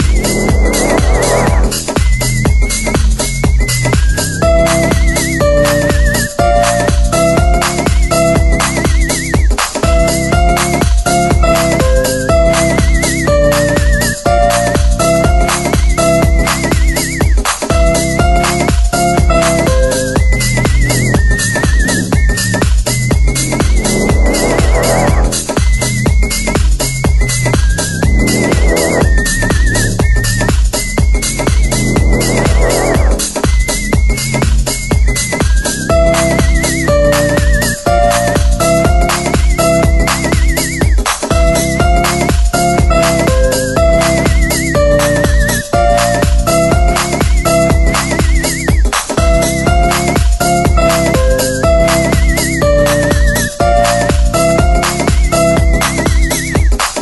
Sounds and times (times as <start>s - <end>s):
Soundtrack music: 0.0s - 2.0s, 4.4s - 22.2s, 23.2s - 25.6s, 27.9s - 29.9s, 31.4s - 33.5s, 35.9s - 56.6s
House music: 0.0s - 57.0s.